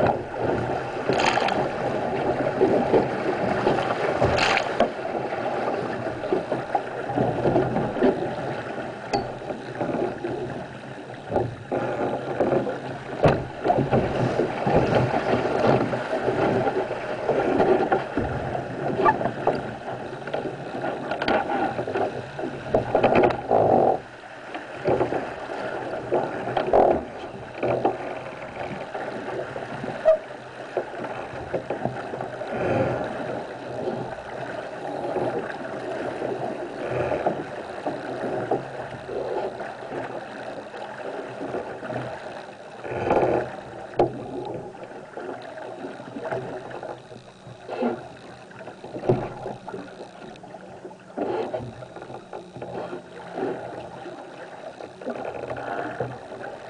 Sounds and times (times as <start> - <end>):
Sailboat, sailing ship: 0.0 - 56.7.